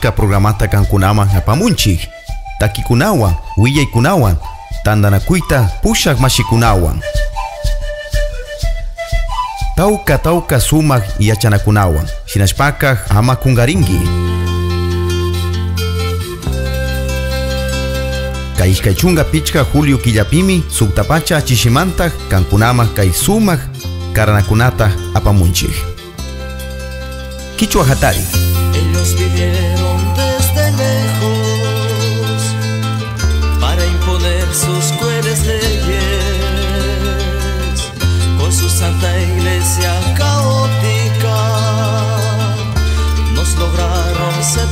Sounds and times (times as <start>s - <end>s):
Speech: 0.0s - 7.0s, 9.8s - 14.2s, 18.6s - 26.0s, 27.6s - 29.3s
Music: 0.0s - 44.7s.